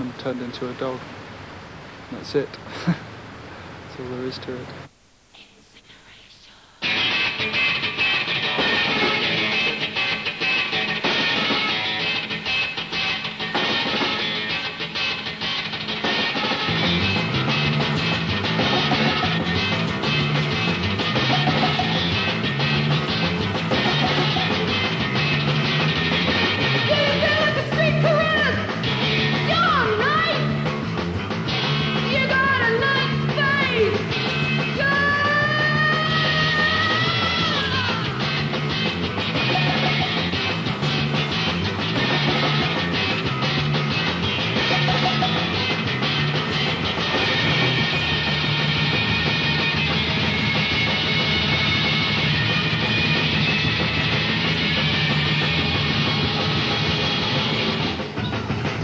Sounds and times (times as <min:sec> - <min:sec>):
Music: 0:06.8 - 0:58.8.